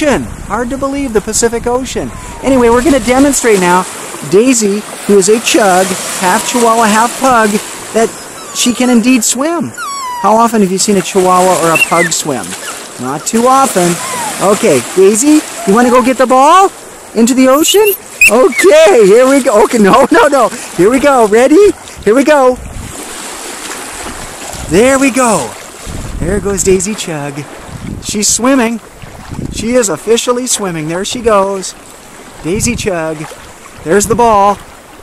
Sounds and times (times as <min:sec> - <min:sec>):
Waves, surf: 0:00.0 - 0:35.0.